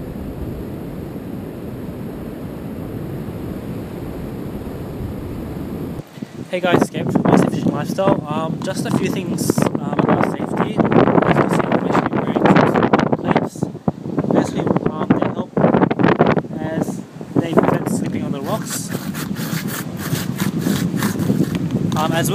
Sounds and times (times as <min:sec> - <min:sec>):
Wind noise (microphone): 0:00.0 - 0:22.3.